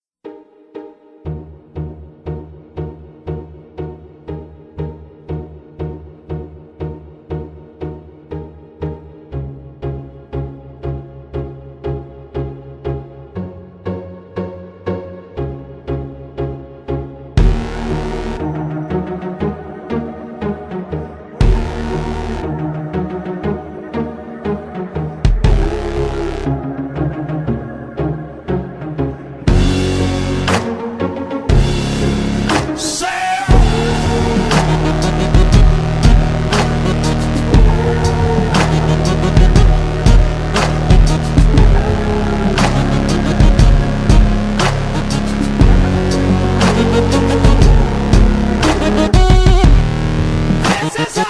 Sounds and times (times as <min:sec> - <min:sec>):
Music: 0:00.2 - 0:51.2.